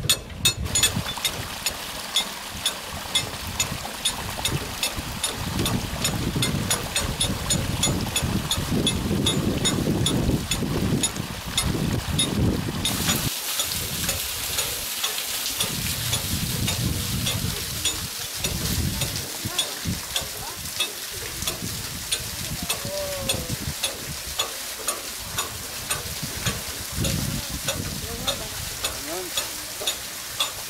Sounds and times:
Water: 0.0s - 30.6s
Speech: 16.9s - 21.4s, 22.4s - 23.6s, 27.2s - 29.9s.

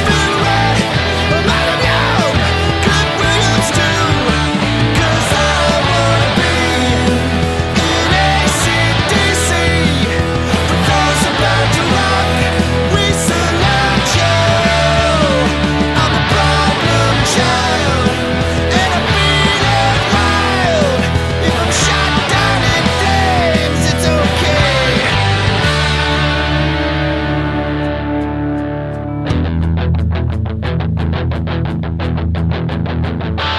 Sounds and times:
Music: 0.0s - 33.5s.

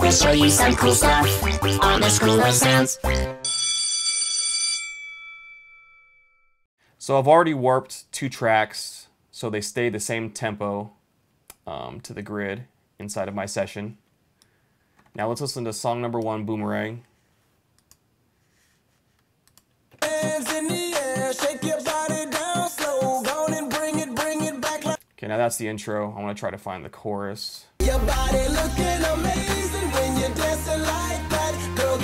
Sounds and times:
Music: 0.0s - 3.4s, 20.0s - 25.0s, 27.8s - 32.0s
Speech: 7.0s - 11.0s, 11.6s - 14.0s, 15.2s - 17.1s, 25.2s - 27.7s.

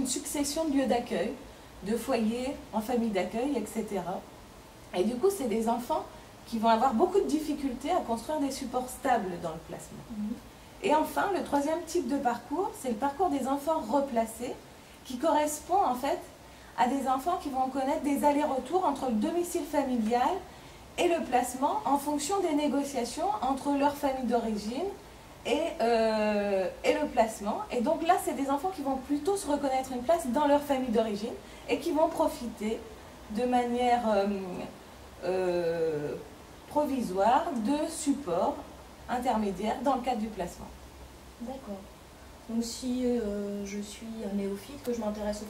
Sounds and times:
Female speech, woman speaking: 0.0s - 4.3s, 4.9s - 40.8s, 41.4s - 41.9s, 42.5s - 45.4s.

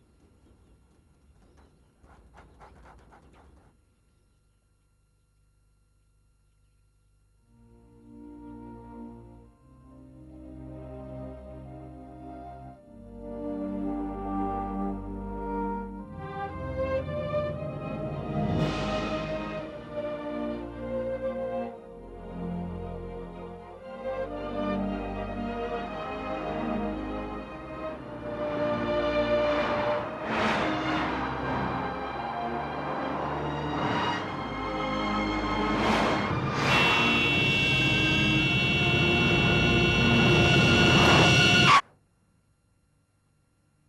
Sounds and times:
Music: 7.4s - 41.8s.

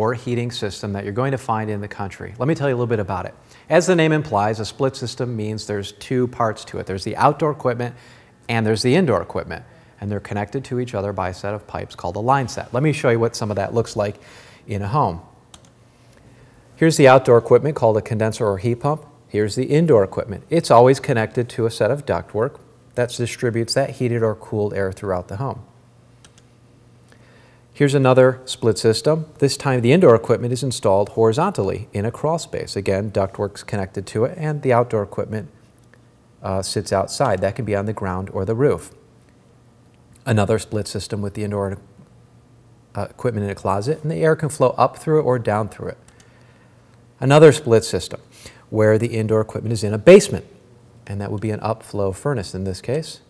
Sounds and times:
Speech: 0.0s - 15.4s, 16.8s - 25.7s, 27.8s - 35.6s, 36.4s - 39.0s, 40.2s - 41.9s, 42.9s - 46.0s, 47.2s - 53.2s.

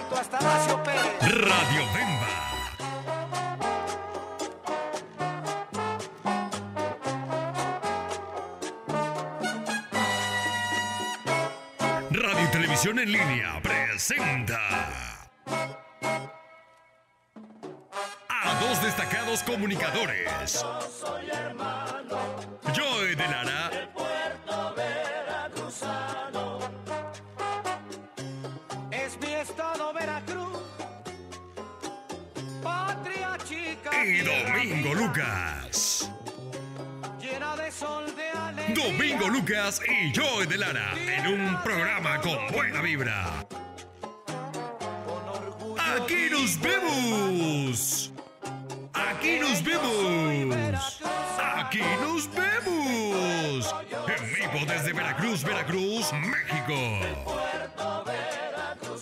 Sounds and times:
Music: 0.0s - 59.0s
Speech: 0.9s - 2.8s, 12.1s - 15.3s, 18.3s - 20.6s, 22.7s - 23.8s, 33.9s - 36.1s, 38.6s - 43.4s, 45.8s - 48.1s, 49.0s - 57.5s.

